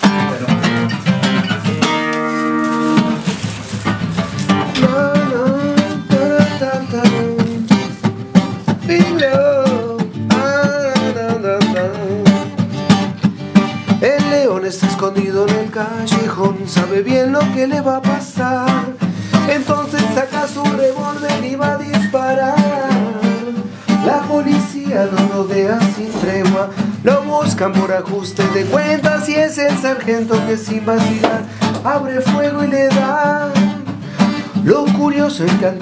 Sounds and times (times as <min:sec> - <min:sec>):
Music: 0:00.0 - 0:35.8.